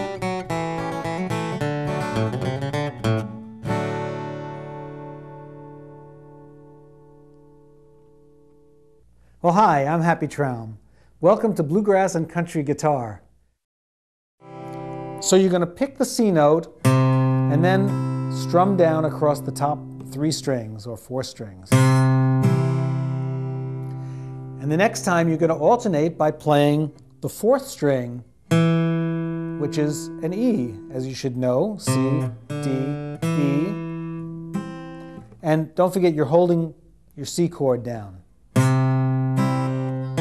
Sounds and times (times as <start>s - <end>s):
Acoustic guitar: 0.0s - 9.8s, 14.4s - 40.2s
Speech: 9.4s - 13.3s, 15.2s - 16.8s, 17.5s - 21.8s, 24.6s - 28.3s, 29.6s - 33.8s, 35.4s - 38.2s.